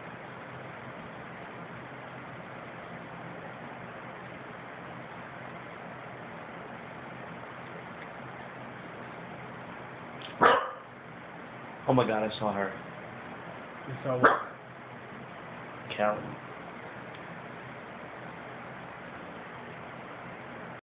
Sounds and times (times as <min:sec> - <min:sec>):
Bow-wow: 0:10.4 - 0:10.9, 0:14.2 - 0:14.6
Speech: 0:11.9 - 0:12.8, 0:13.9 - 0:14.4, 0:15.9 - 0:16.4.